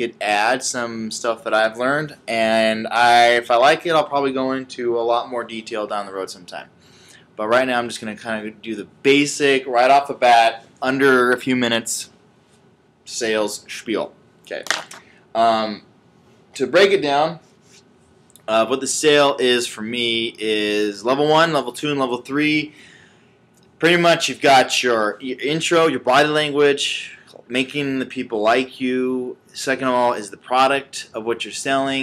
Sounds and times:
Speech: 0.0s - 6.7s, 7.4s - 12.1s, 13.1s - 14.8s, 15.4s - 15.8s, 16.6s - 17.4s, 18.4s - 22.8s, 23.8s - 32.0s.

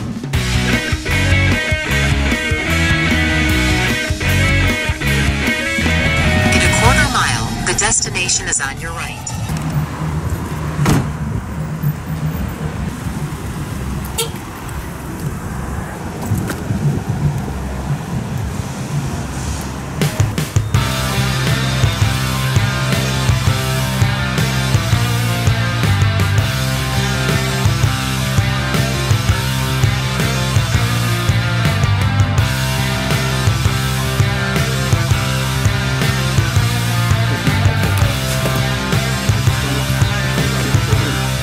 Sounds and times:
Traffic noise, roadway noise: 0.0s - 8.2s, 8.8s - 41.4s
Car: 9.1s - 41.4s.

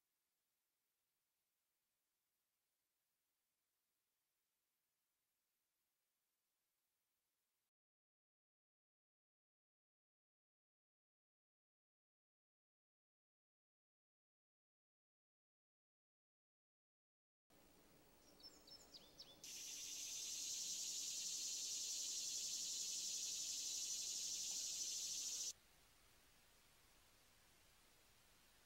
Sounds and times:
Chirp, tweet: 18.2s - 25.5s.

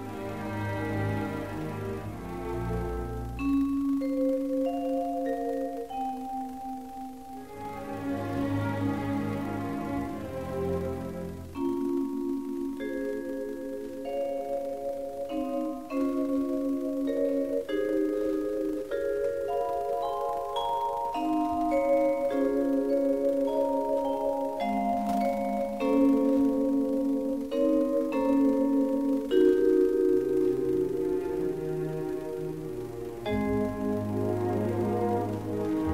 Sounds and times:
Vibraphone: 3.4s - 7.7s, 11.6s - 32.0s
Marimba, xylophone: 3.4s - 7.9s, 11.5s - 32.6s, 33.2s - 35.9s.

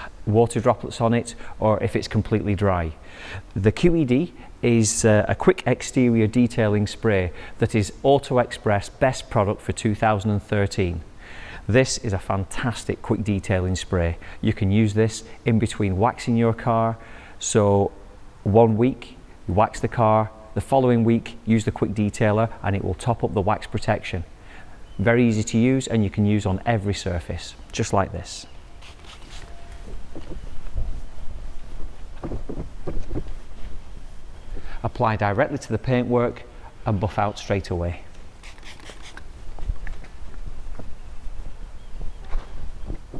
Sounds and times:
Speech: 0.0s - 11.0s, 11.7s - 24.3s, 25.0s - 28.5s, 34.8s - 38.1s.

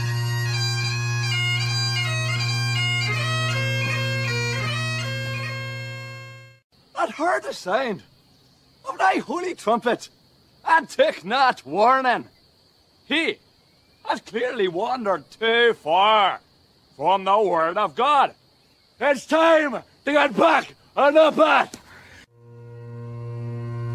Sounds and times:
Bagpipes: 0.0s - 6.6s, 22.3s - 23.9s
Speech: 7.0s - 8.1s, 8.9s - 12.3s, 13.1s - 13.4s, 14.0s - 16.4s, 17.0s - 18.4s, 19.0s - 21.8s.

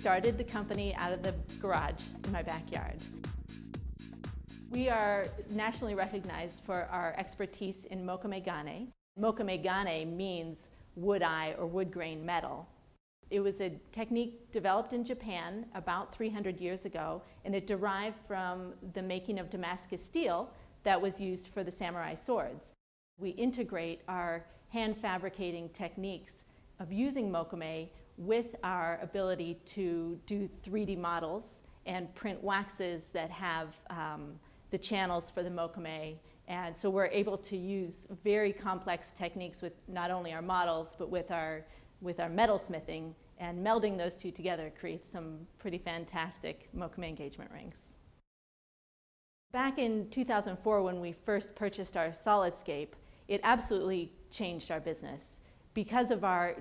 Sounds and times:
Speech: 0.0s - 3.1s, 4.7s - 12.7s, 13.3s - 48.0s, 49.6s - 56.6s.

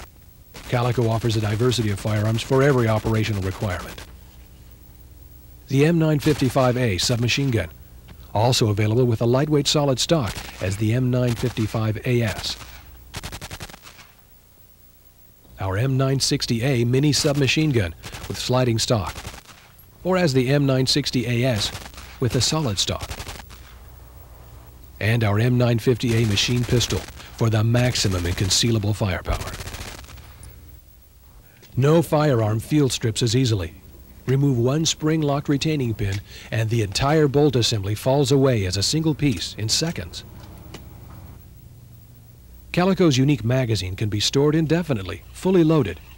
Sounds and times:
Speech: 0.6s - 4.0s, 5.7s - 12.6s, 15.6s - 19.2s, 20.0s - 23.1s, 25.0s - 29.6s, 31.8s - 40.3s, 42.7s - 46.1s.

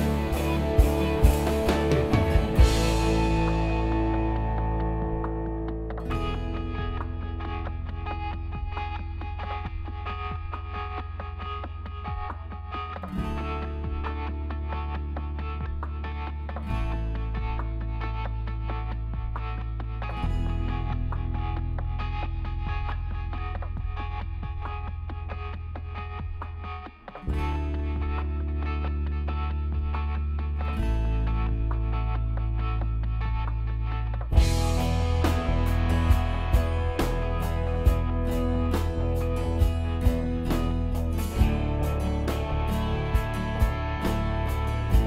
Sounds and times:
Music: 0.0s - 45.0s.

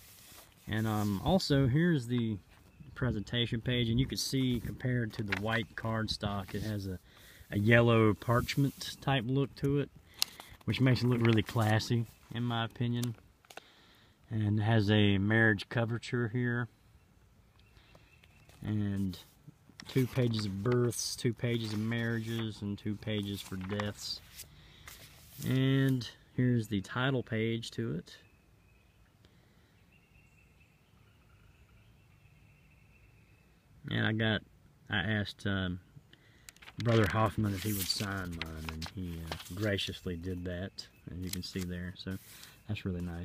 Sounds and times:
Speech: 0.7s - 9.9s, 10.7s - 13.2s, 14.3s - 16.7s, 18.6s - 24.3s, 25.4s - 28.2s, 33.8s - 35.9s, 36.8s - 43.2s.

